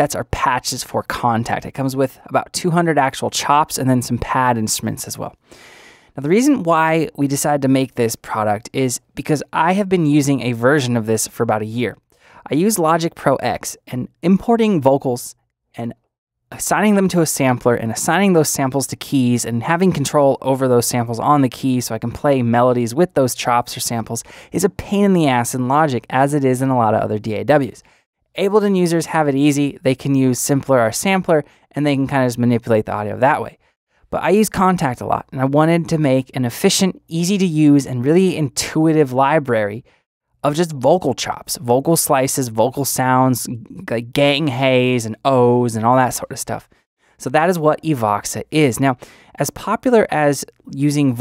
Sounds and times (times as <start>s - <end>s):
Speech: 0.0s - 5.4s, 6.2s - 51.2s.